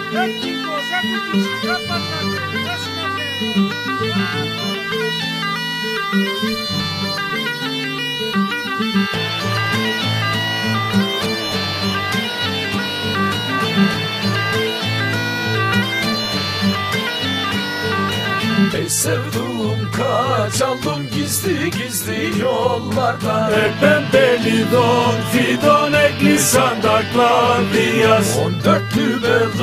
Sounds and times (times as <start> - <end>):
Bagpipes: 0.0 - 29.6
Wind instrument, woodwind instrument: 0.0 - 29.6.